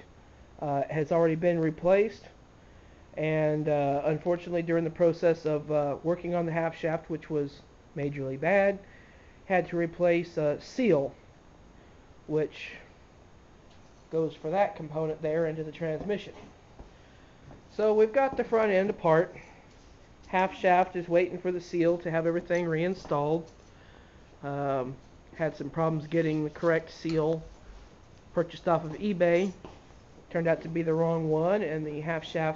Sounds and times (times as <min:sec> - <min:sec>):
Speech: 0:00.6 - 0:02.4, 0:03.2 - 0:08.8, 0:09.5 - 0:11.2, 0:12.3 - 0:12.9, 0:14.1 - 0:16.5, 0:17.7 - 0:19.4, 0:20.3 - 0:23.5, 0:24.4 - 0:27.5, 0:28.3 - 0:29.6, 0:30.3 - 0:32.5.